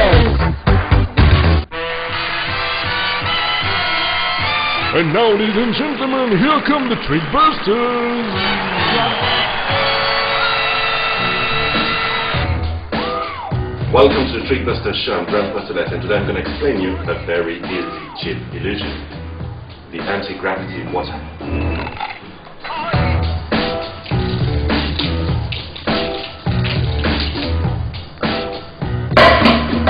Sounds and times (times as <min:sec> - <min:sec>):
Music: 0:00.0 - 0:29.9
Speech: 0:04.9 - 0:08.3, 0:13.9 - 0:19.0, 0:19.9 - 0:21.3.